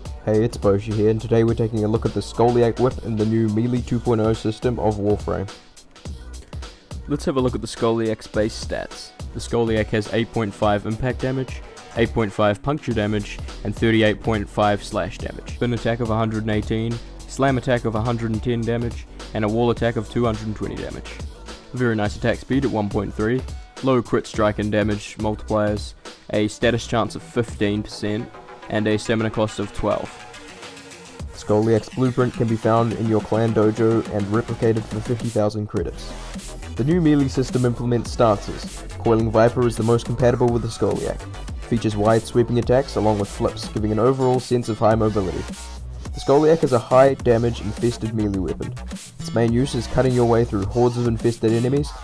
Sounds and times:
Music: 0.0 - 52.0
Speech: 0.2 - 5.6, 7.0 - 30.2, 31.4 - 36.2, 36.8 - 45.5, 46.2 - 52.0.

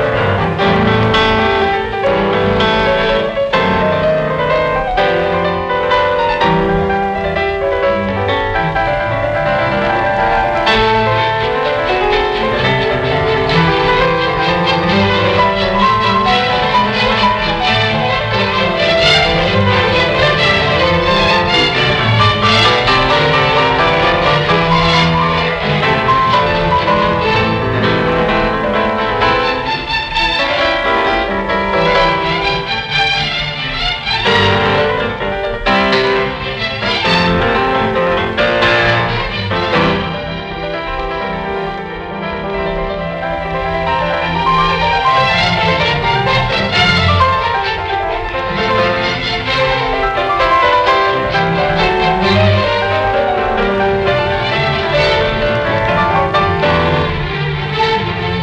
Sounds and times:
Electric piano: 0.0 - 58.4.

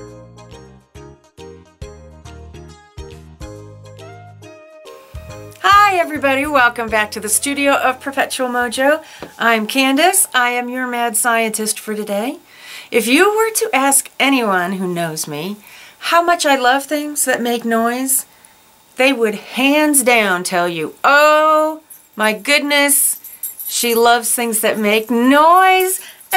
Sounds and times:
Music: 0.0 - 9.0
Speech: 5.6 - 18.3, 19.0 - 26.3.

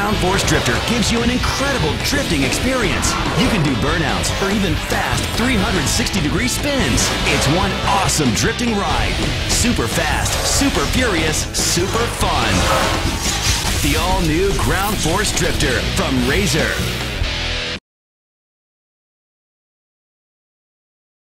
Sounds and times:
Speech: 0.0 - 17.0
Music: 0.0 - 17.8.

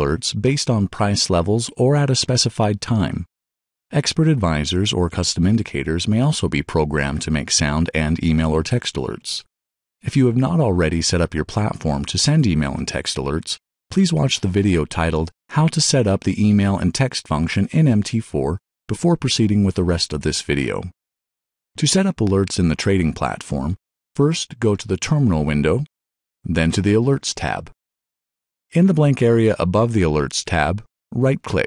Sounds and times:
Speech: 0.0 - 3.3, 3.9 - 21.0, 21.8 - 25.9, 26.5 - 27.8, 28.7 - 31.6.

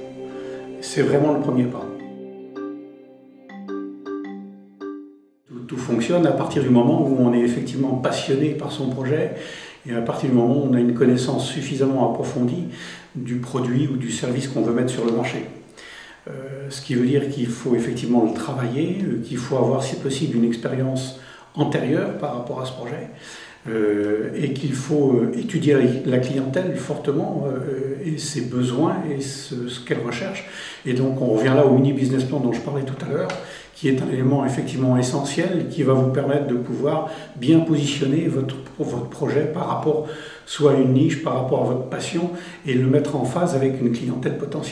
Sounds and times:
Speech: 0.0 - 2.1, 5.5 - 15.6, 16.2 - 44.7.

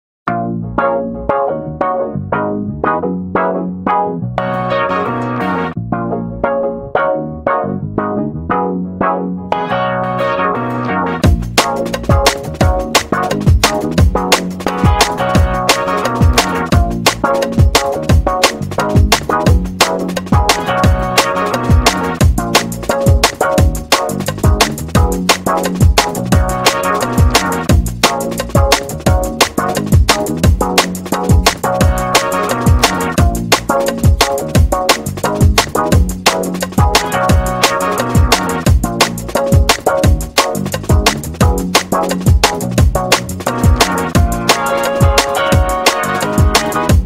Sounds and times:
Electronic music: 0.3 - 47.0.

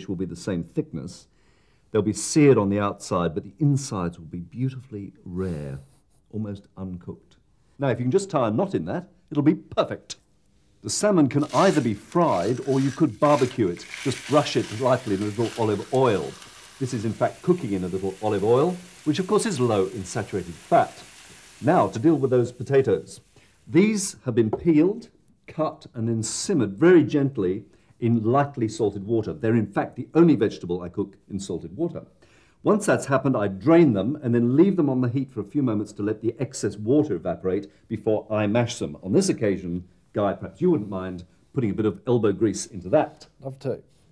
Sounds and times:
Sizzle: 11.4 - 23.8
Frying (food): 11.4 - 23.9.

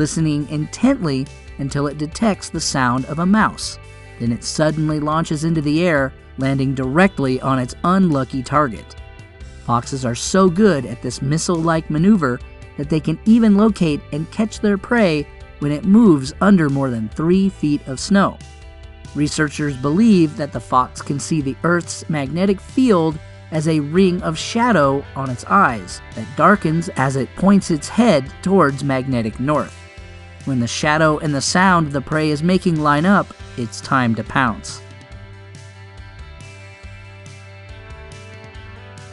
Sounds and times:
Speech: 0.0 - 9.0, 9.7 - 18.4, 19.2 - 29.7, 30.5 - 34.8
Music: 0.0 - 39.1.

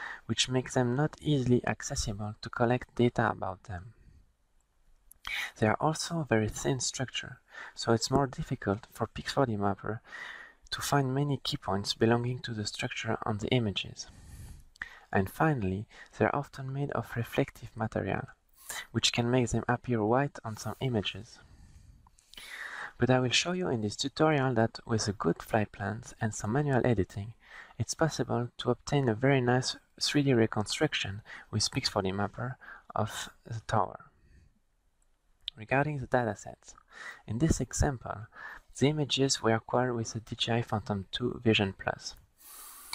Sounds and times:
Speech: 0.2 - 4.0, 5.3 - 10.1, 10.7 - 14.1, 15.1 - 21.4, 22.9 - 34.1, 35.5 - 42.2.

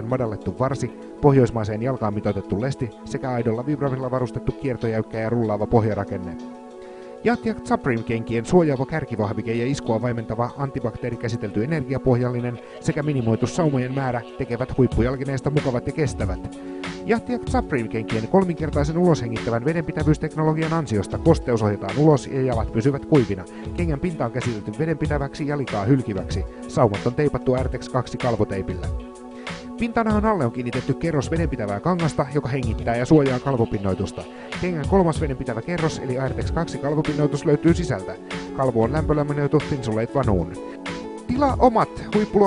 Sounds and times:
Speech: 0.0 - 6.4, 7.2 - 29.0, 29.8 - 40.6, 41.3 - 42.4
Music: 0.0 - 42.4.

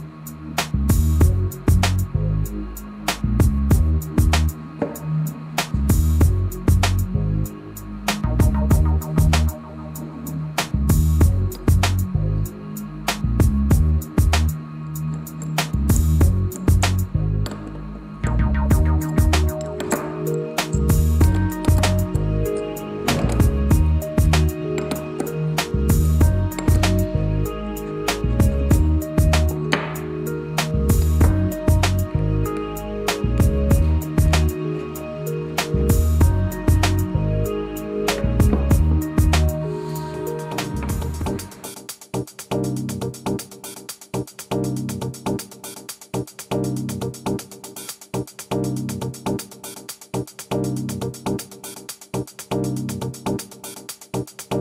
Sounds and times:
Music: 0.0 - 54.6
Tools: 19.0 - 21.9.

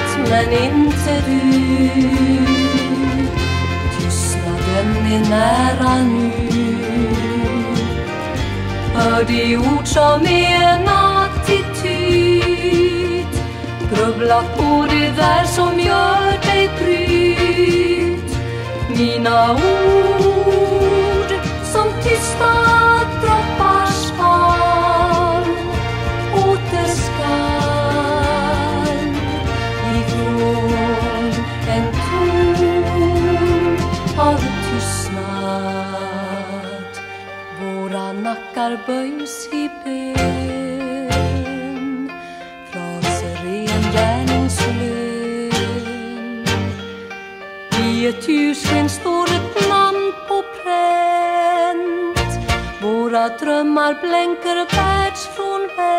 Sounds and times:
Christmas music: 0.0 - 55.9.

